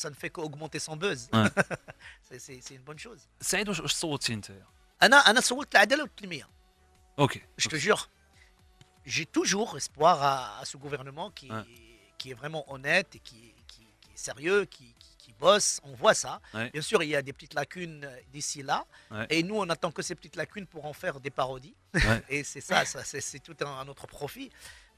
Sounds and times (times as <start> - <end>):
Speech: 0.0 - 1.6, 2.3 - 6.5, 7.2 - 8.1, 9.1 - 24.5.